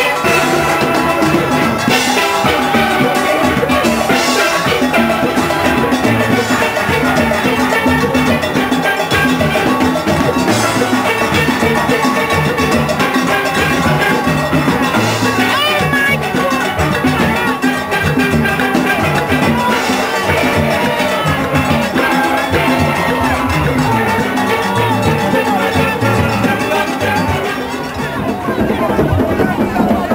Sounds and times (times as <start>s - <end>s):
Drum: 0.0s - 30.1s
Steelpan: 0.0s - 30.1s
Speech: 10.5s - 30.1s.